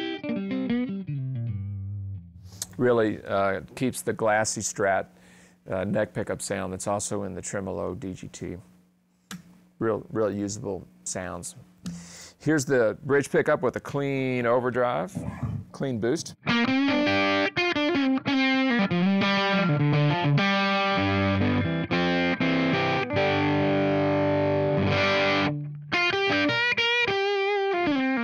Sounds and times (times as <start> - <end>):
Music: 0.0 - 2.5, 16.4 - 28.2
Distortion: 0.0 - 28.2
Speech: 2.7 - 5.1, 5.7 - 8.7, 9.8 - 11.6, 12.4 - 16.4.